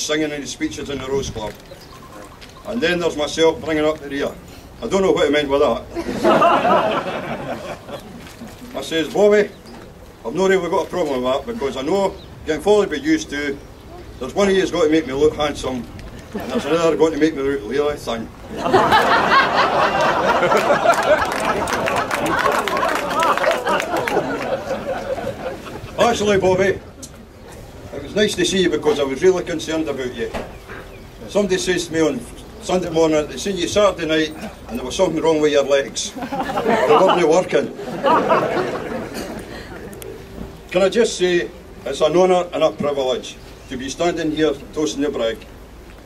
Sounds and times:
Male speech, man speaking: 0.0 - 1.6, 2.7 - 5.9, 8.7 - 9.6, 10.2 - 13.6, 14.2 - 15.9, 16.5 - 18.3, 26.0 - 26.9, 27.9 - 30.4, 31.2 - 37.8, 40.7 - 45.5
Narration, monologue: 0.0 - 46.0.

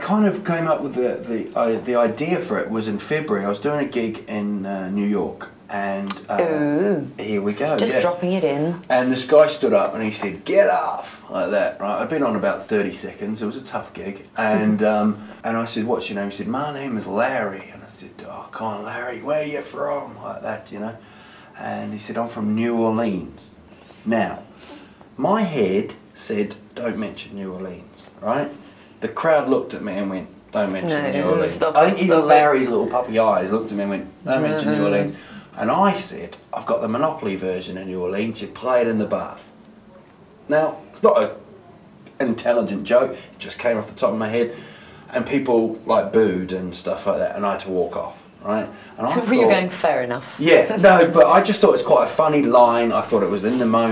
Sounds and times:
Speech: 0.0 - 21.0, 25.2 - 39.5, 42.2 - 53.9.

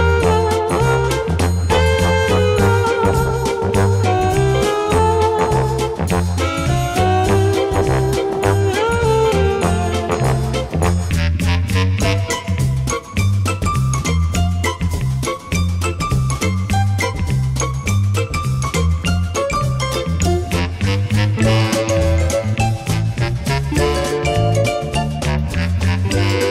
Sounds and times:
Music: 0.0 - 26.5.

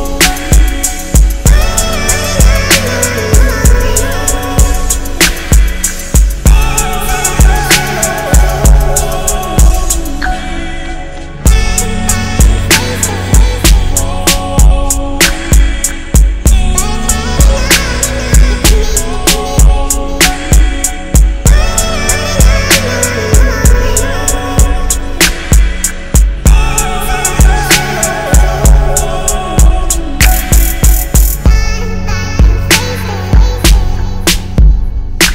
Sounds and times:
Music: 0.0 - 35.3.

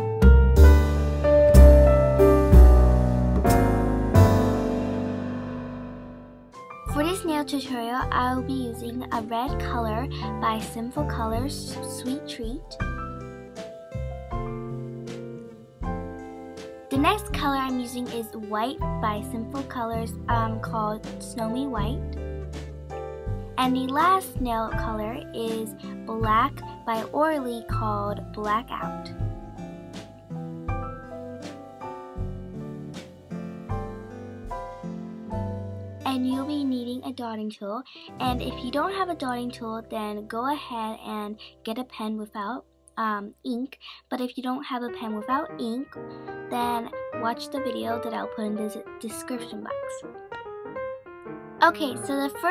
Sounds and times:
Music: 0.0 - 52.5
Speech: 6.9 - 12.8, 16.9 - 22.1, 23.6 - 29.1, 36.1 - 50.0, 51.6 - 52.5.

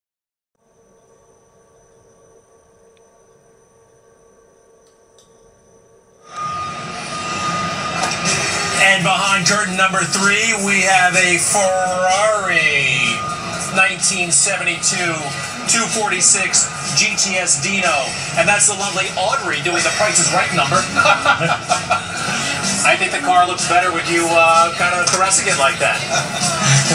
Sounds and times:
Television: 6.0 - 26.9.

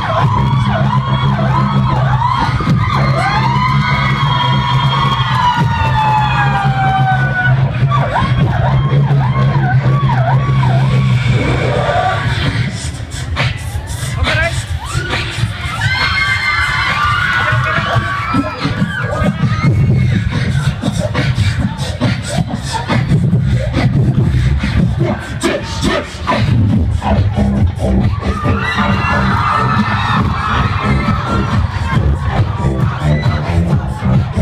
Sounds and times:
Beatboxing: 0.0 - 34.4
Crowd: 0.0 - 34.4
Speech: 14.2 - 14.6.

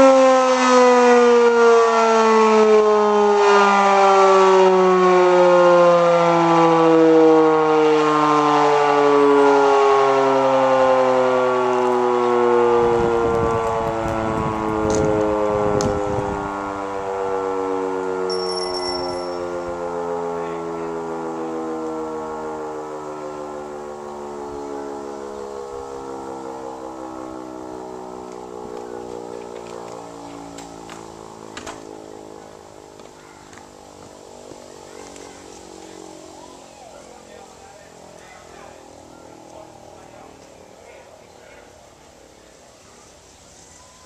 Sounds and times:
Civil defense siren: 0.0 - 43.2.

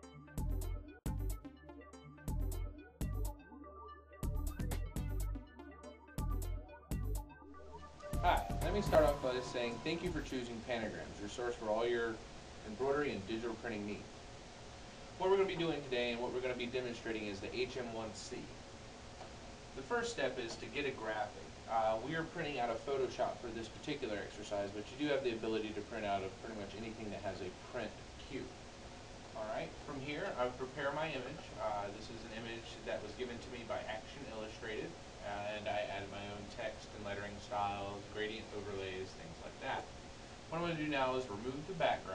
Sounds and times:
Speech: 8.2 - 14.1, 15.2 - 18.6, 19.8 - 28.6, 29.3 - 39.9, 40.5 - 42.1.

